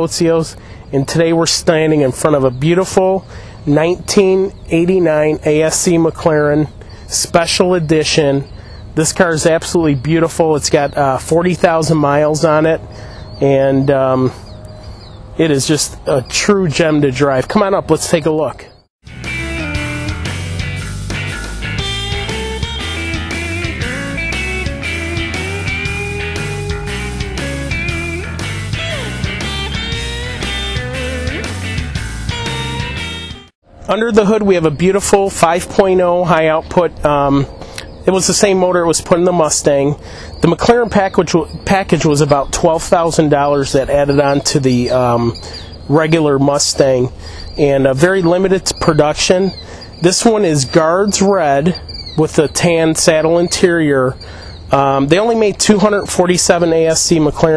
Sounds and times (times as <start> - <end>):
Music: 19.0 - 33.6.